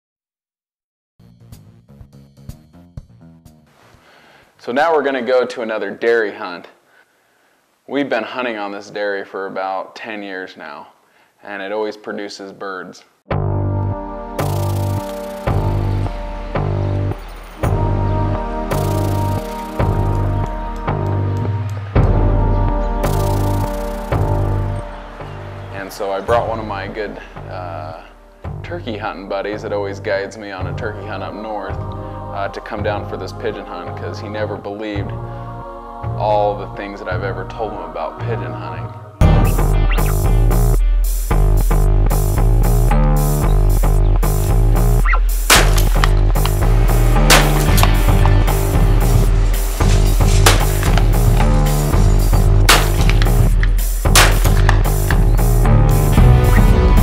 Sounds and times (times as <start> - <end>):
Music: 1.2 - 5.5, 13.3 - 57.0
Speech: 4.6 - 6.8, 7.9 - 13.1, 25.7 - 31.8, 32.4 - 35.1, 36.2 - 39.0.